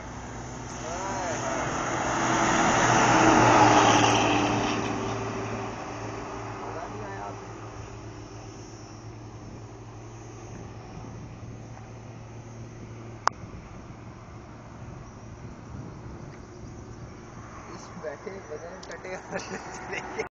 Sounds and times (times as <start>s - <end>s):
Vehicle: 0.0s - 20.3s
Speech: 0.8s - 1.7s, 6.7s - 7.4s, 17.7s - 19.4s.